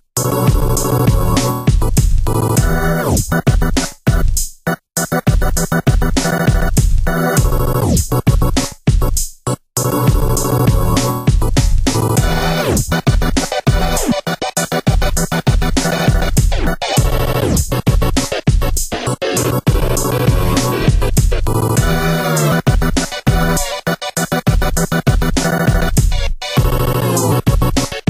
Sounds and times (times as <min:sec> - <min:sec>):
Electronica: 0:09.8 - 0:28.0.